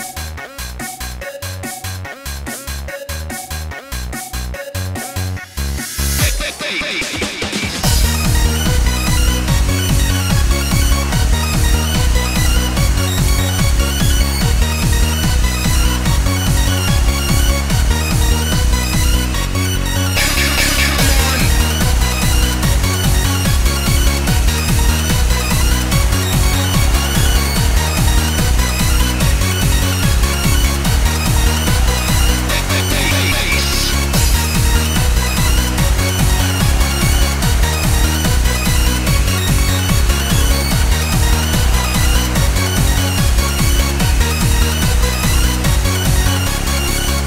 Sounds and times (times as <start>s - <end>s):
Techno: 0.0s - 47.2s.